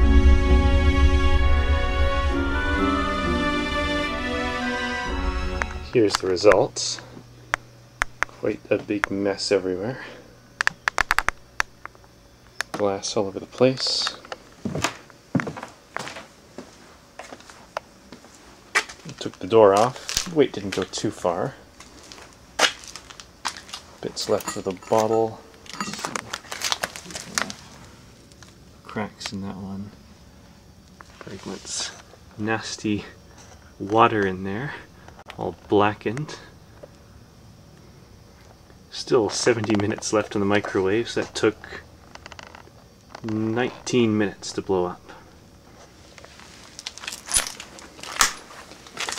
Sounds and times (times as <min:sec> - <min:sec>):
Speech: 0:05.9 - 0:07.1, 0:08.4 - 0:10.2, 0:12.8 - 0:14.2, 0:19.1 - 0:21.6, 0:24.0 - 0:25.4, 0:28.8 - 0:30.0, 0:31.2 - 0:33.2, 0:33.8 - 0:36.6, 0:38.9 - 0:41.9, 0:43.2 - 0:45.2.